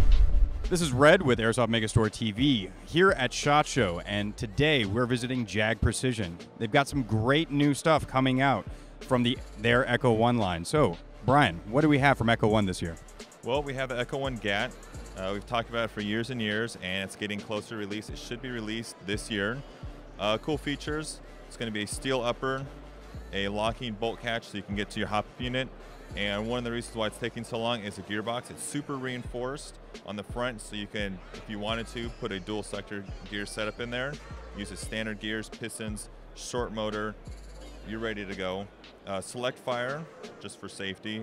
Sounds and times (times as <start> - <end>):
Music: 0.0 - 41.2
Speech: 0.7 - 19.6, 20.2 - 22.7, 23.3 - 37.2, 37.9 - 41.2.